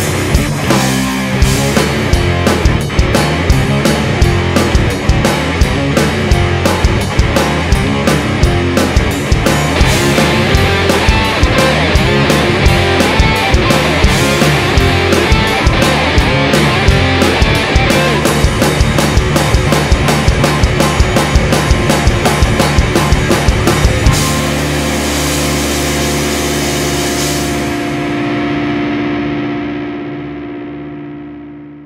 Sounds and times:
Punk rock: 0.0s - 31.8s.

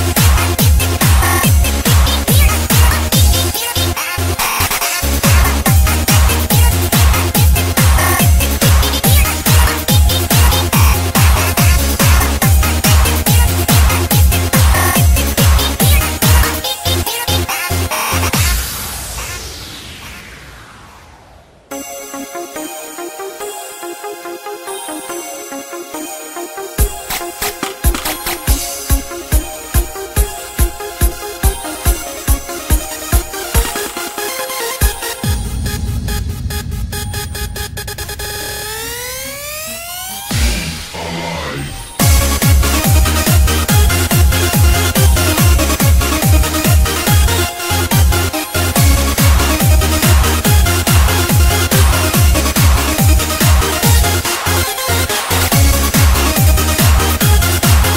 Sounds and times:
Exciting music: 0.0s - 57.9s.

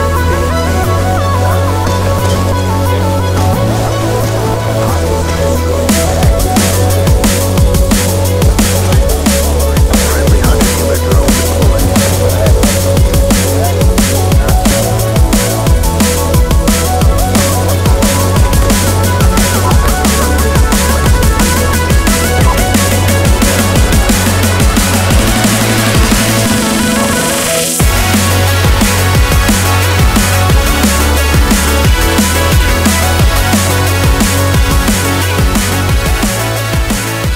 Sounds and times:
Drum and bass: 0.0s - 37.3s.

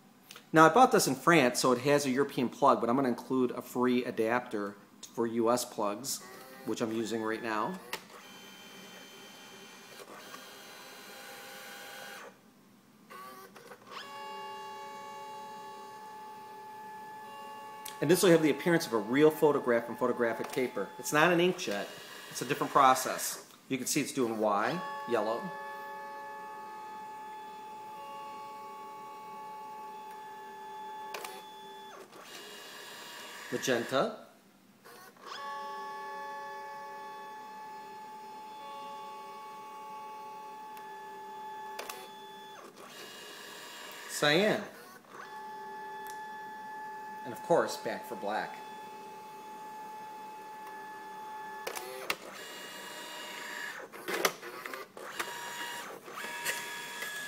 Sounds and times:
Speech: 0.5s - 7.8s, 18.0s - 25.6s, 33.5s - 34.3s, 44.1s - 44.8s, 47.2s - 48.6s
Printer: 6.2s - 12.4s, 13.1s - 23.4s, 24.3s - 34.0s, 34.9s - 57.2s.

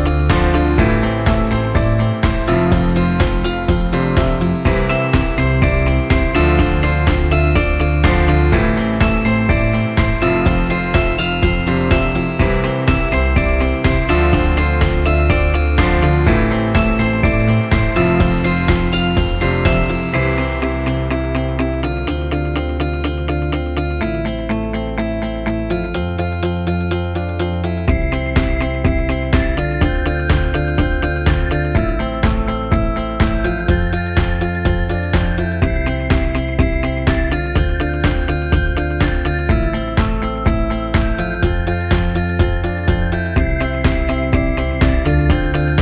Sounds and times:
Music: 0.0s - 45.8s.

